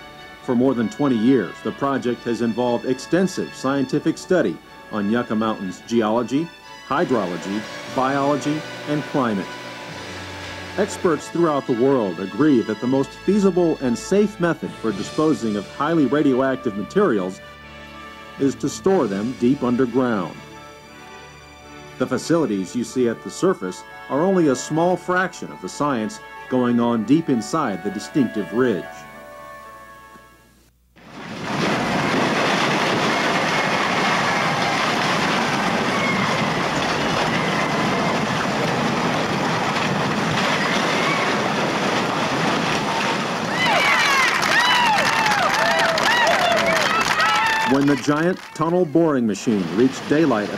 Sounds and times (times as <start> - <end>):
Outside, rural or natural: 31.0 - 50.5.